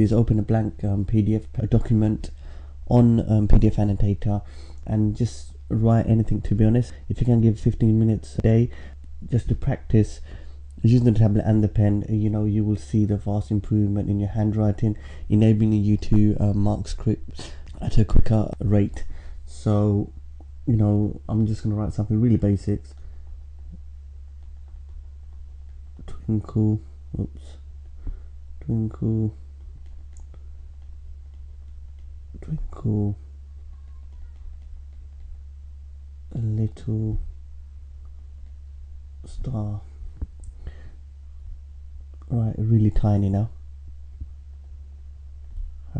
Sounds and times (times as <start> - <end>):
Speech: 0.0 - 10.2, 10.8 - 23.0, 26.0 - 27.6, 28.6 - 29.4, 32.4 - 34.4, 36.3 - 37.3, 39.2 - 40.0, 42.3 - 43.6.